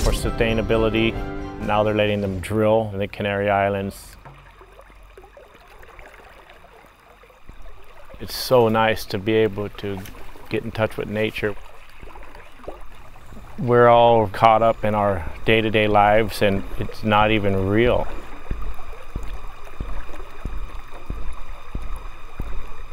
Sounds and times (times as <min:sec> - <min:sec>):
Speech: 0:00.0 - 0:04.2, 0:08.2 - 0:11.6, 0:13.6 - 0:18.2.